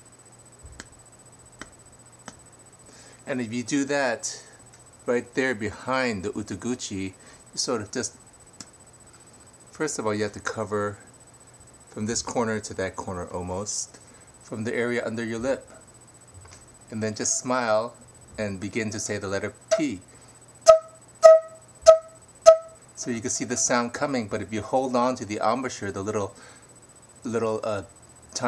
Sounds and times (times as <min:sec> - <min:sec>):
Speech: 0:03.3 - 0:04.5, 0:05.1 - 0:08.2, 0:09.8 - 0:11.0, 0:11.9 - 0:13.9, 0:14.5 - 0:15.8, 0:16.9 - 0:20.0, 0:23.0 - 0:26.4, 0:27.2 - 0:28.4.